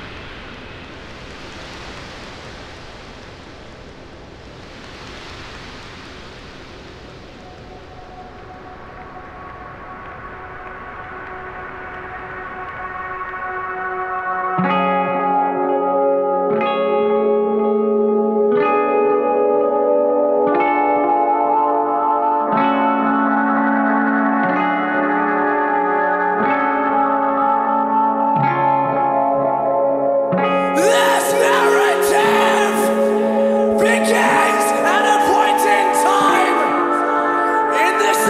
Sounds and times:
Music: 6.3 - 38.3.

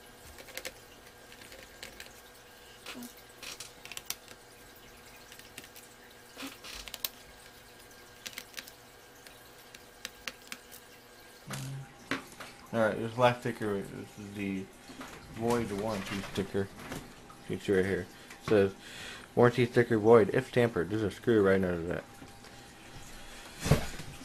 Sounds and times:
Inside, small room: 0.0 - 24.2.

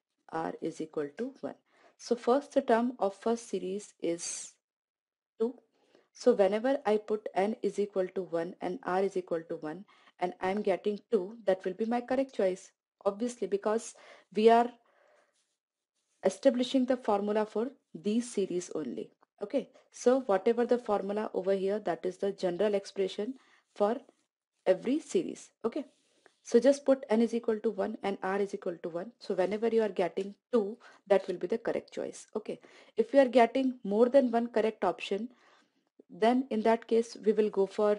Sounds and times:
Speech: 0.3 - 4.5, 6.2 - 14.7, 16.2 - 24.0, 24.7 - 25.9, 26.5 - 35.3, 36.1 - 37.9.

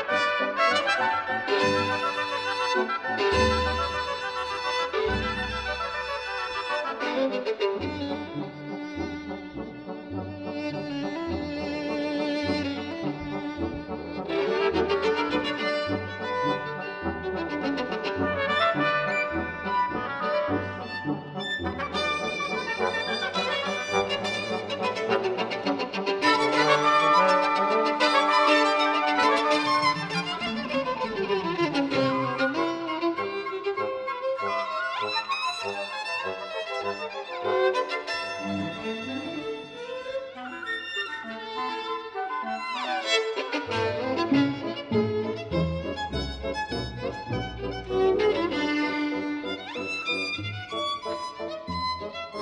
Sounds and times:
Orchestra: 0.0 - 52.4
Violin, fiddle: 0.0 - 52.4.

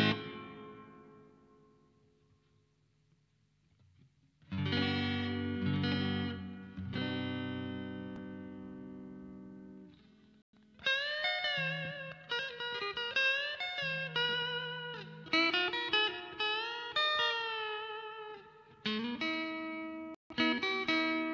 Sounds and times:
Guitar: 0.0 - 21.3.

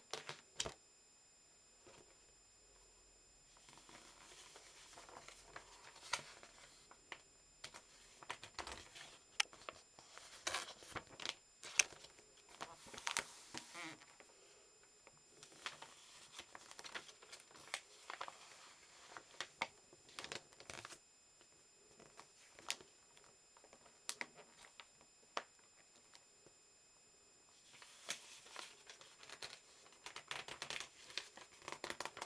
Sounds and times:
Crackle: 1.7 - 32.2.

